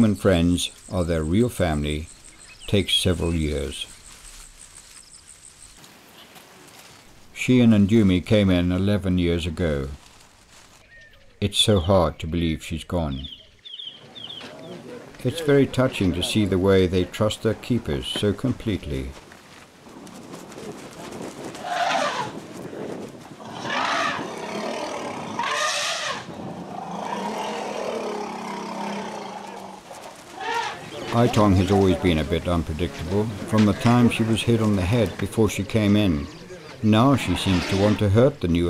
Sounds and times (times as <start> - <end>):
Speech: 0.0 - 2.1, 2.7 - 3.9, 7.4 - 10.0, 11.4 - 13.3, 14.4 - 19.2, 30.8 - 38.6
Wild animals: 21.5 - 22.4, 23.4 - 38.2.